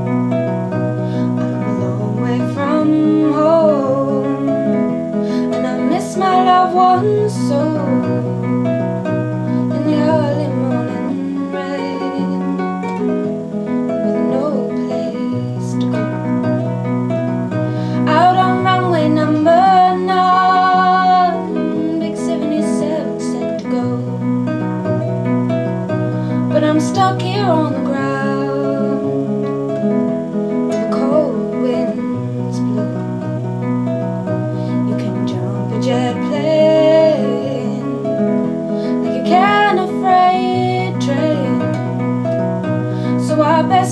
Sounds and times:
Music: 0.0 - 43.9.

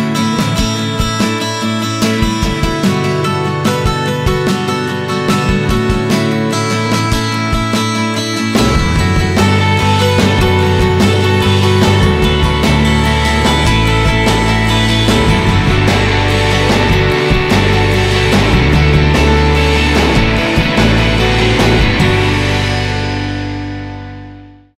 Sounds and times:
Background music: 0.0 - 24.7.

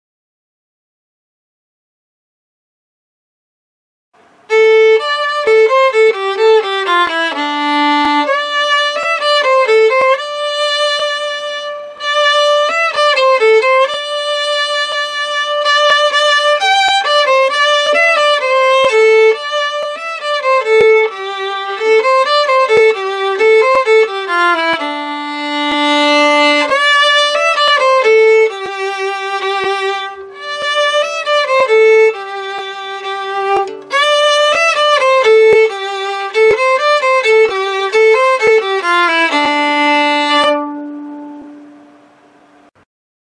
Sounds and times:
Violin, fiddle: 4.4 - 42.0.

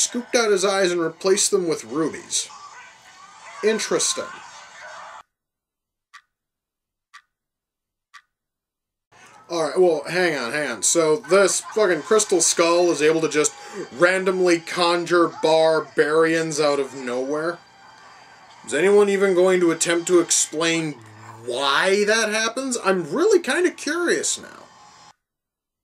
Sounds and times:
Speech: 0.0 - 2.6, 3.5 - 4.5, 9.4 - 17.6, 18.7 - 24.7
Inside, small room: 0.0 - 25.8.

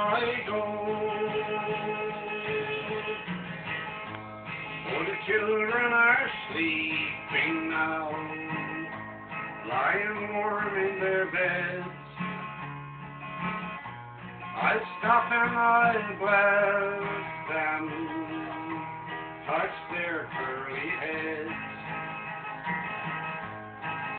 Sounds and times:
Folk music: 0.0 - 24.1.

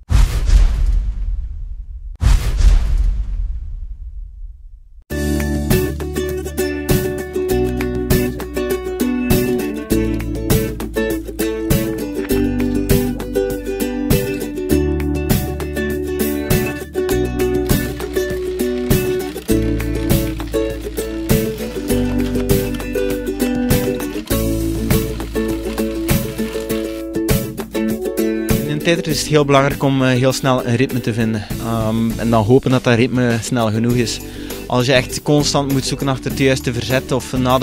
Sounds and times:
Music: 5.1 - 37.6
Speech: 28.7 - 37.6.

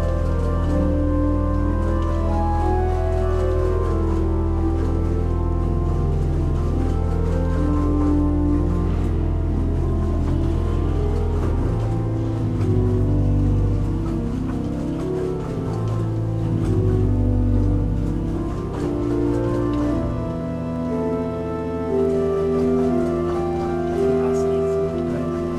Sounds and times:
Piano: 0.0 - 25.5.

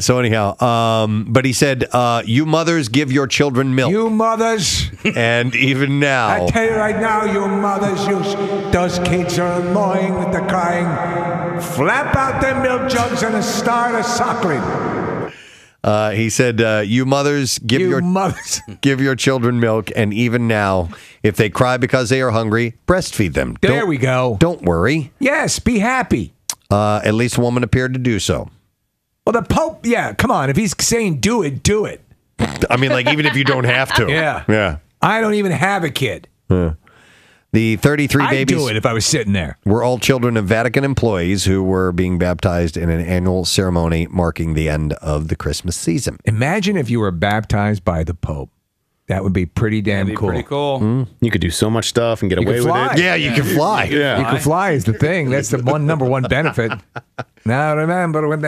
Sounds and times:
Speech: 0.0 - 11.0, 11.6 - 14.8, 15.8 - 28.6, 29.3 - 36.8, 37.5 - 48.5, 49.1 - 58.4.

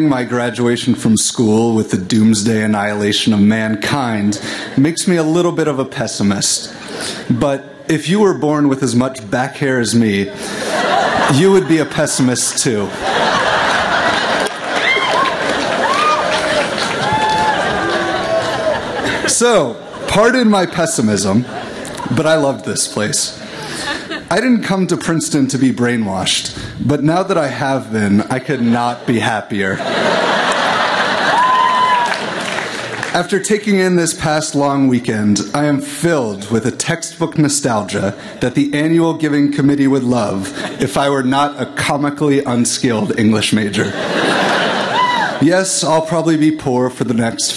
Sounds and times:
Male speech, man speaking: 0.0 - 6.7, 7.3 - 10.4, 11.3 - 12.9, 19.3 - 21.5, 22.1 - 23.4, 24.3 - 29.8, 33.1 - 44.0, 45.4 - 47.5.

